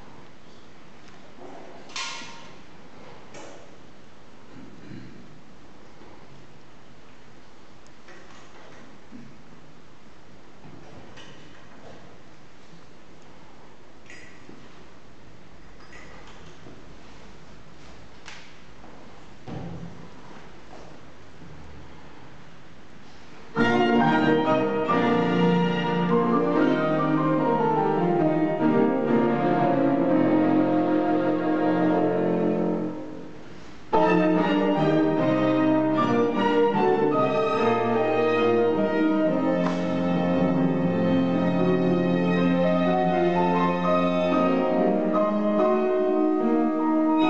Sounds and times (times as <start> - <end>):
Cello: 23.5 - 47.3.